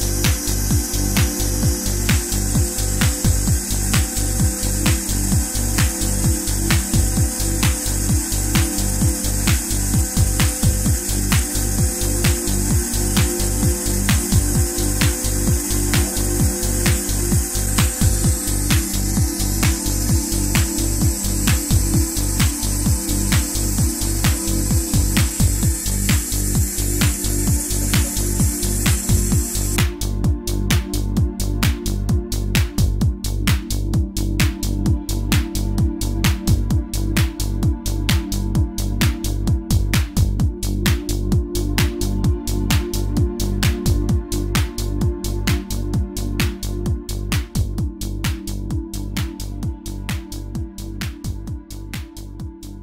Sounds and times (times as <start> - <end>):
Music: 0.0 - 52.8.